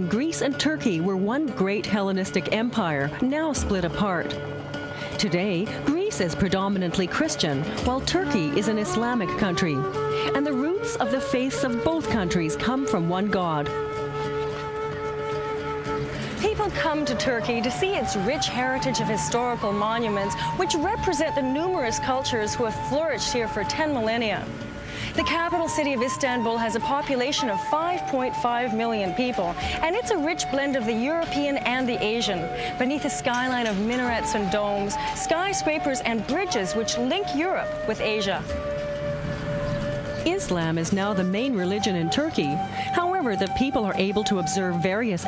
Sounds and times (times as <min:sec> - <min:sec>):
Speech: 0:00.0 - 0:04.4, 0:05.2 - 0:13.8, 0:16.4 - 0:24.5, 0:25.2 - 0:38.5, 0:40.3 - 0:45.2
Music: 0:00.0 - 0:45.2.